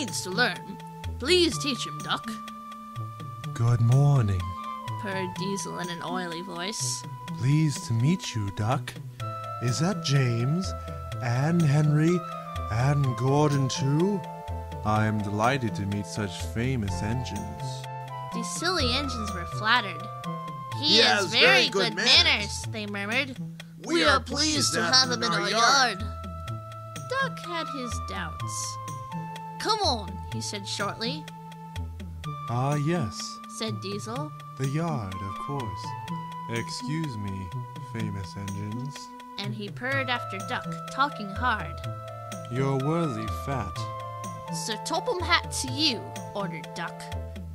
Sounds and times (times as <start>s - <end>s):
Speech: 0.0s - 2.4s, 3.6s - 9.0s, 9.6s - 14.2s, 14.9s - 17.8s, 18.4s - 20.1s, 20.8s - 26.1s, 27.1s - 28.8s, 29.6s - 31.2s, 32.5s - 35.9s, 36.5s - 41.7s, 42.5s - 43.9s, 44.6s - 47.1s
Music: 0.0s - 47.5s.